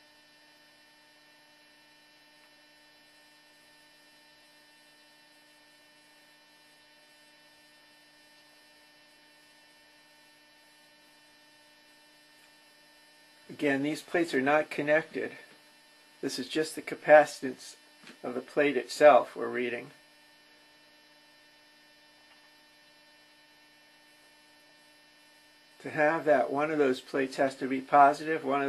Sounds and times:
Hum: 0.0 - 28.6
Mains hum: 0.0 - 28.6.

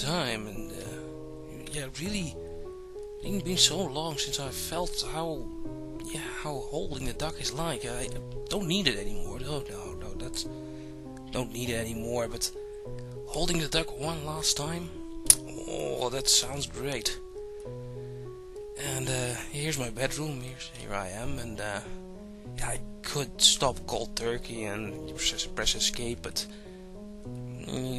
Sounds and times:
Speech: 0.0 - 2.4, 3.2 - 10.5, 11.3 - 12.6, 13.3 - 17.2, 18.8 - 21.9, 22.6 - 26.5, 27.6 - 27.9
Music: 0.0 - 27.9.

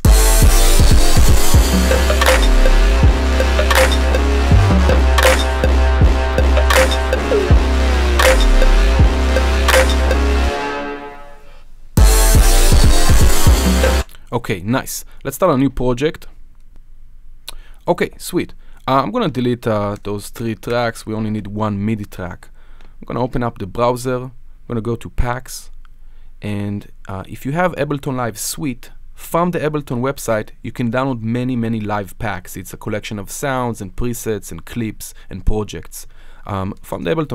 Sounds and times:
Speech: 14.3 - 16.4, 17.8 - 25.7, 26.4 - 37.3.

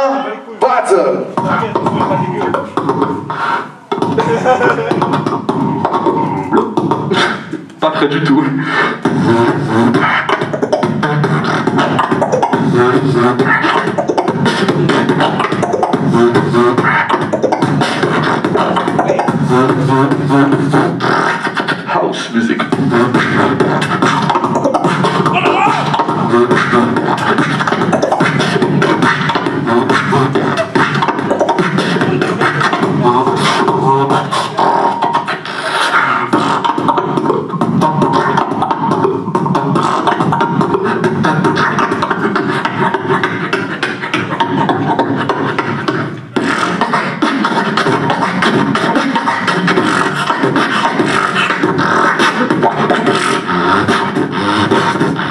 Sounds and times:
Beatboxing: 0.0 - 55.3.

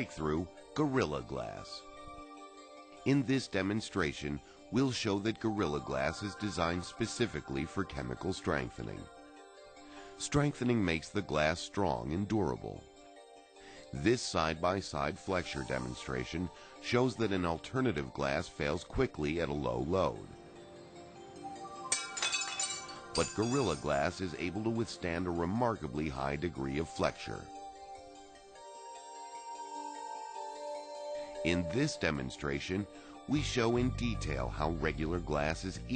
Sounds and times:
Speech: 0.0 - 1.8, 3.1 - 9.1, 10.2 - 12.8, 13.9 - 20.3, 23.2 - 27.5, 31.4 - 35.9
Music: 0.0 - 35.9.

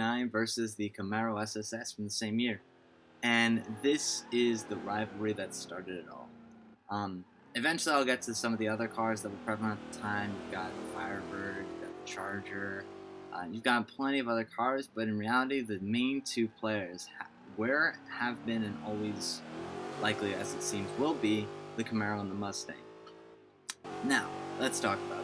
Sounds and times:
Speech: 0.0 - 2.6, 3.2 - 6.3, 6.9 - 19.4, 20.0 - 22.8, 24.0 - 25.2.

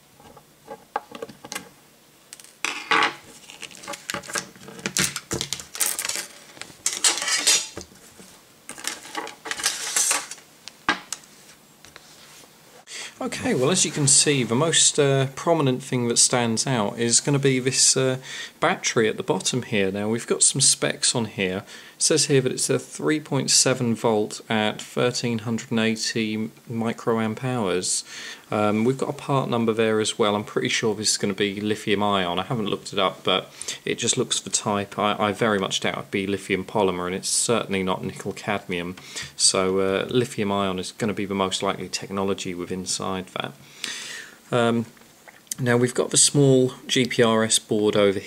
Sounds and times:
Inside, small room: 0.0 - 48.2
Speech: 13.1 - 43.6, 44.5 - 48.2.

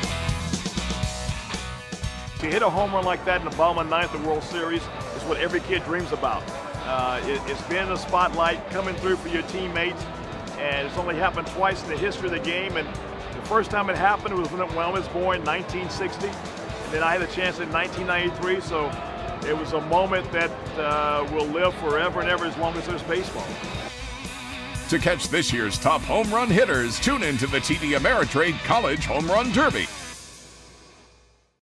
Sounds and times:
Music: 0.0 - 31.6
Speech: 2.4 - 10.0, 10.6 - 23.6, 24.9 - 29.9.

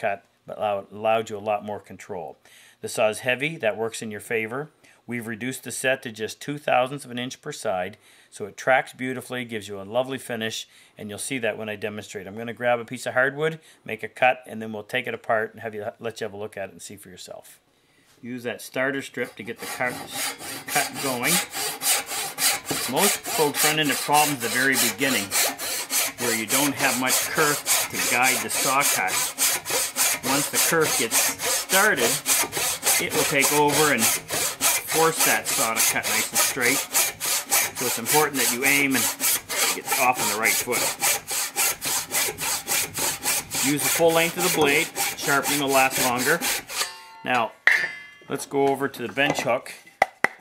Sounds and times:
Sawing: 18.9 - 47.1
Rub: 19.0 - 46.8
Wood: 19.3 - 46.9.

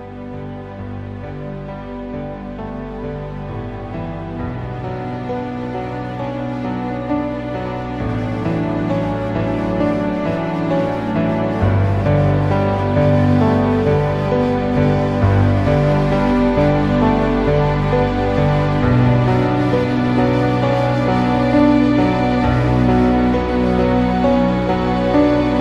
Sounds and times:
Music: 0.0 - 25.6.

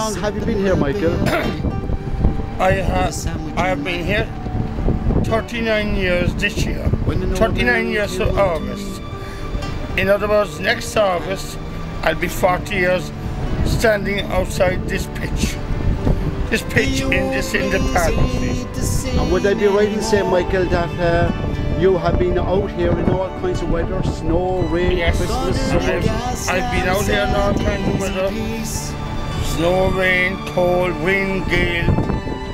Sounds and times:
Speech: 0.0 - 1.6, 2.6 - 4.3, 5.3 - 9.0, 10.0 - 13.1, 13.7 - 15.6, 16.5 - 28.9, 29.5 - 32.0
Music: 0.0 - 32.5.

